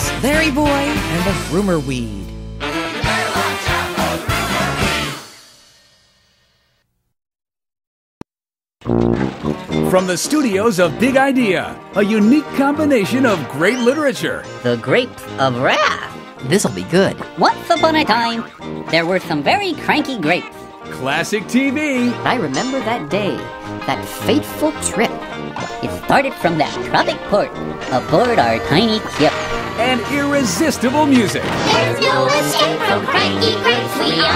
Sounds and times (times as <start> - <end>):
Speech: 0.0 - 2.3, 9.9 - 25.2, 25.8 - 31.5
Music: 0.0 - 6.8, 8.8 - 34.3.